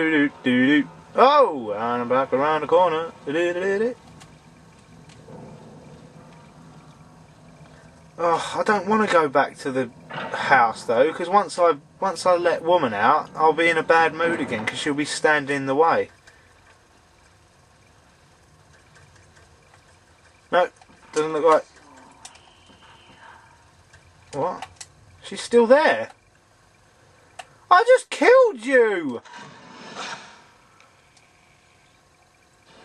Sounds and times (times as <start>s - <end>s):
Speech: 8.2s - 16.1s, 27.7s - 29.2s.